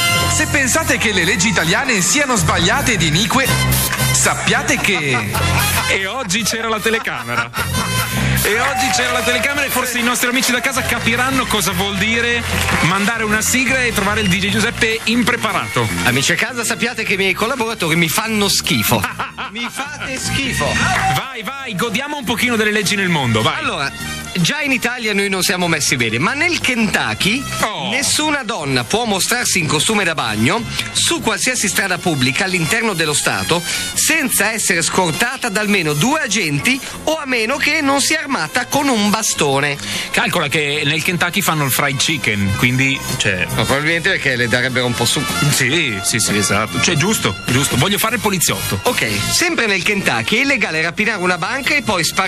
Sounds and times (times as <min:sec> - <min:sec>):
Music: 0:00.0 - 0:52.2
Speech: 0:00.4 - 0:03.5, 0:04.2 - 0:07.5, 0:08.4 - 0:52.2.